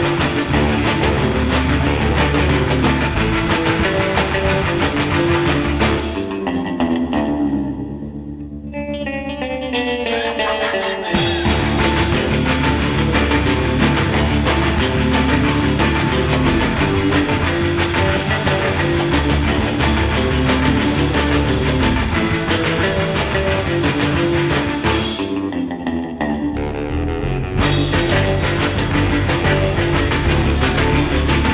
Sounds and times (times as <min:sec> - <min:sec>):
Music: 0:00.0 - 0:31.5.